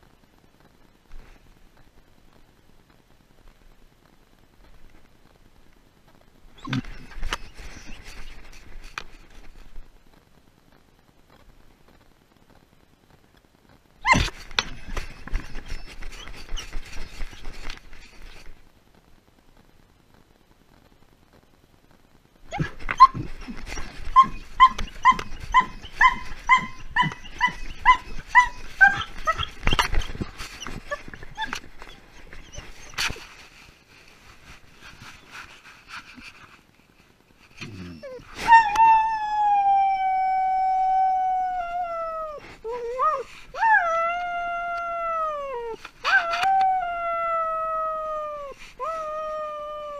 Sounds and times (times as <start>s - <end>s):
Dog: 6.6s - 8.4s, 14.0s - 18.4s, 22.5s - 33.2s.